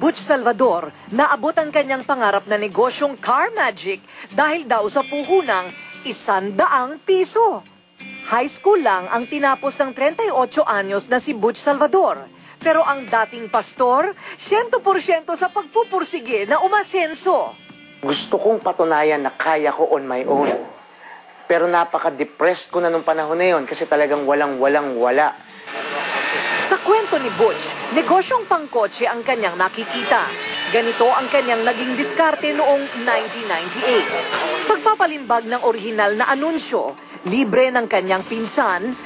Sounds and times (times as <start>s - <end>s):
Music: 0.0s - 20.9s, 22.0s - 39.0s.